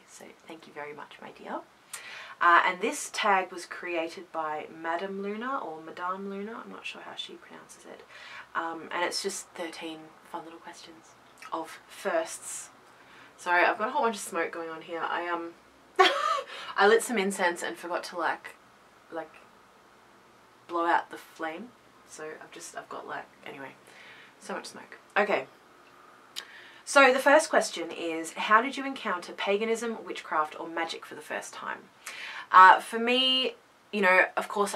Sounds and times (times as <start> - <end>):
Speech: 0.0 - 1.7, 2.3 - 12.7, 13.4 - 19.4, 20.7 - 23.8, 24.4 - 25.5, 26.9 - 34.7.